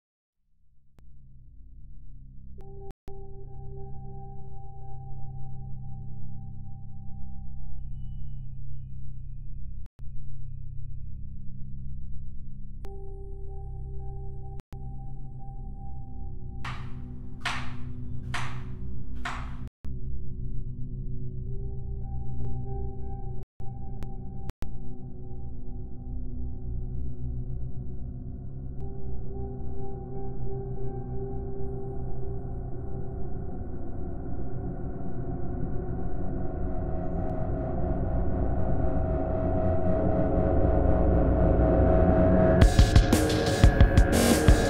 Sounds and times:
Music: 1.0 - 44.7.

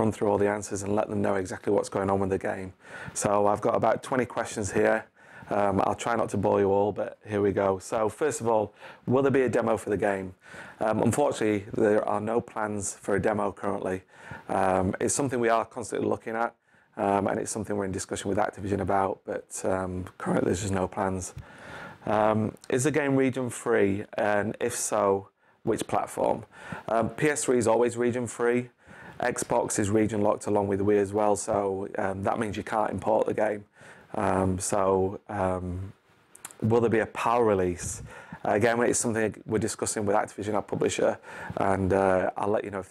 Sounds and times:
Speech: 0.0 - 21.4, 22.0 - 42.9.

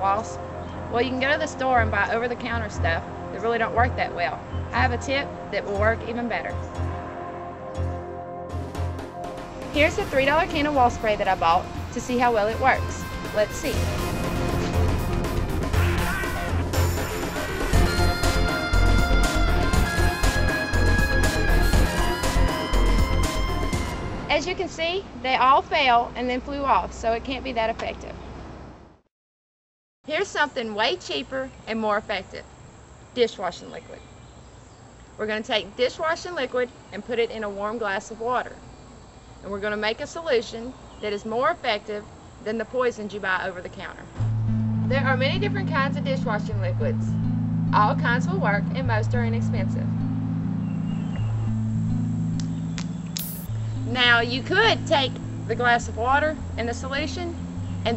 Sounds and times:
Music: 0.0 - 24.6, 44.2 - 57.9
Speech: 1.0 - 6.5, 9.8 - 13.8, 24.3 - 28.2, 30.1 - 32.5, 33.2 - 34.0, 35.2 - 38.6, 39.5 - 44.1, 44.9 - 47.1, 47.8 - 49.9, 53.9 - 57.9.

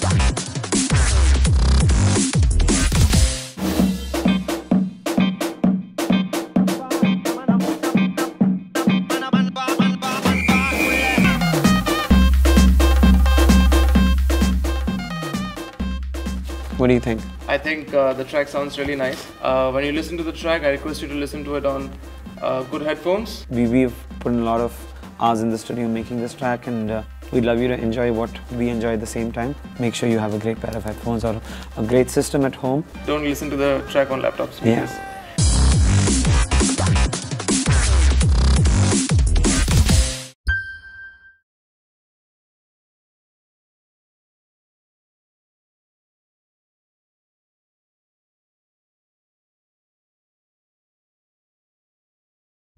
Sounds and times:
Music: 0.0 - 41.4.

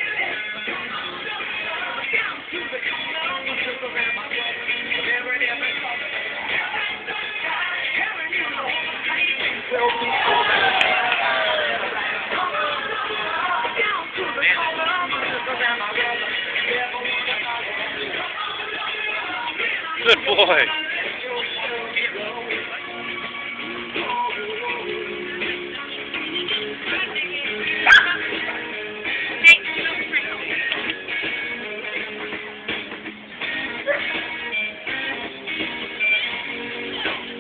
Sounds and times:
Music: 0.0 - 37.4
Bow-wow: 27.8 - 28.3, 33.8 - 34.2.

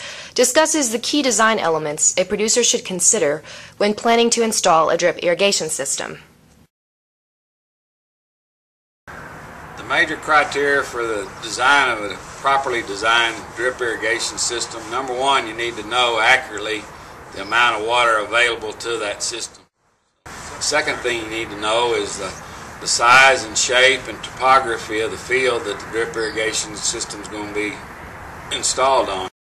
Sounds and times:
Speech: 0.4 - 6.3, 9.8 - 19.6, 20.6 - 27.8, 28.6 - 29.4.

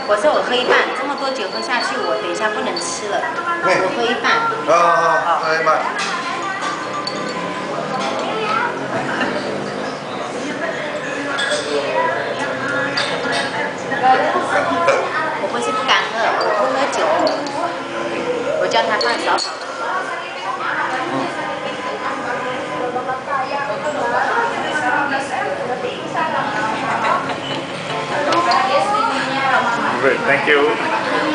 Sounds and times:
Inside, large room or hall: 0.0 - 31.3.

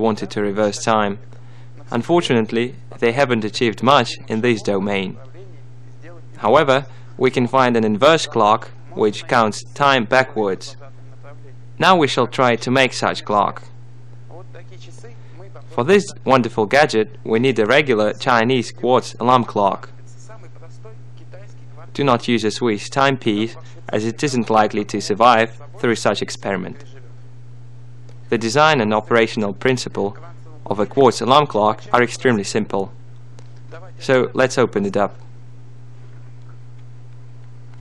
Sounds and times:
Speech: 0.0 - 27.2, 28.3 - 33.0, 33.7 - 35.3.

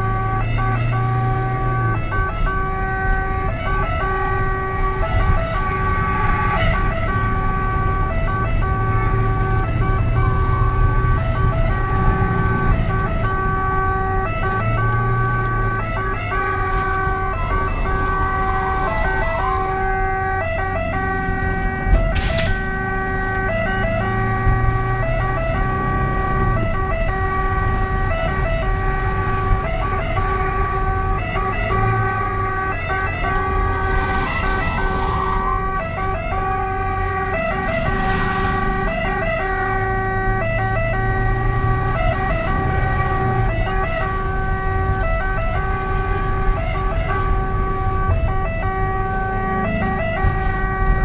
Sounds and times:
Ambulance (siren): 0.0 - 51.0.

